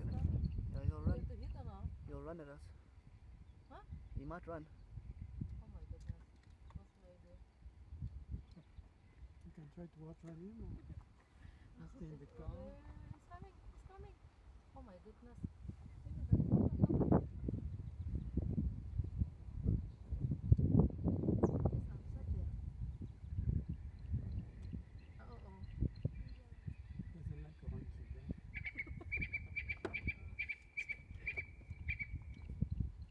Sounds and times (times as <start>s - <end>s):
Outside, rural or natural: 0.0s - 33.1s.